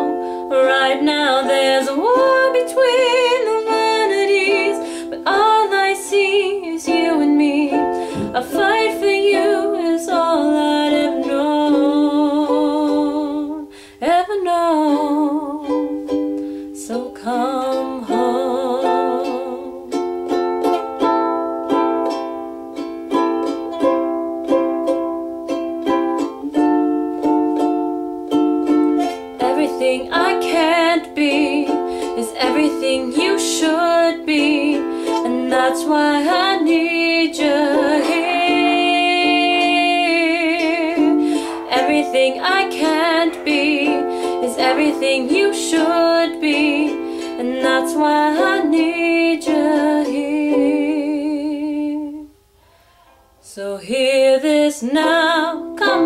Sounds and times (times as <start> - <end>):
Ukulele: 0.0 - 56.0
Singing: 41.6 - 52.2.